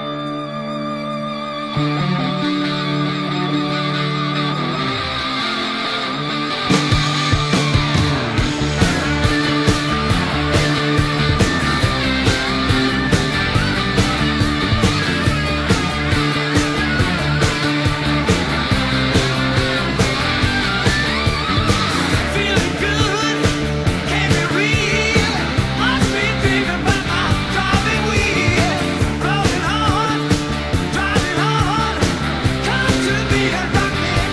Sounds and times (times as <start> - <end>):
Music: 0.0 - 34.3.